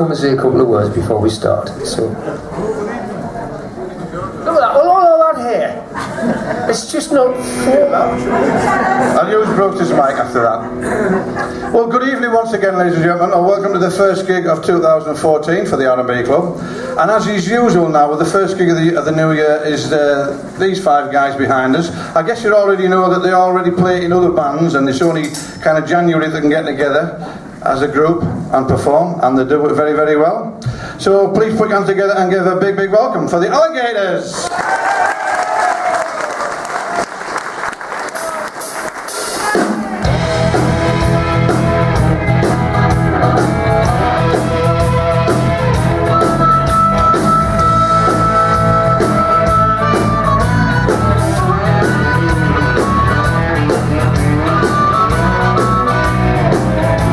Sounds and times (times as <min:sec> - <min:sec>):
Speech: 0:00.0 - 0:05.9, 0:11.8 - 0:34.4.